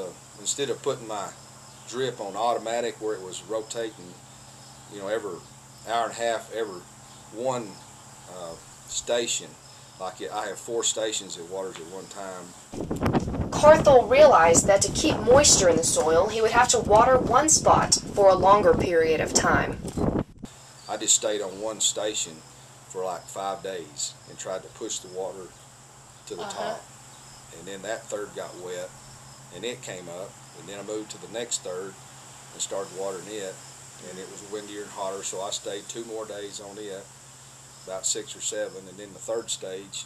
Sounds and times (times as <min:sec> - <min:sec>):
Speech: 0:00.0 - 0:04.2, 0:04.9 - 0:06.8, 0:07.4 - 0:12.5, 0:13.6 - 0:19.8, 0:20.9 - 0:22.4, 0:23.0 - 0:25.5, 0:26.3 - 0:26.8, 0:27.6 - 0:28.9, 0:29.6 - 0:32.0, 0:32.6 - 0:37.1, 0:37.9 - 0:40.0.